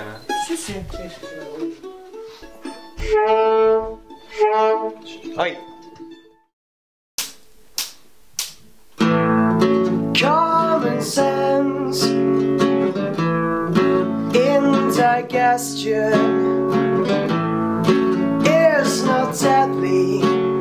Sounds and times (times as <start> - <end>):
Speech: 0.0 - 1.8, 5.1 - 5.6
Music: 0.0 - 6.5, 9.0 - 20.6.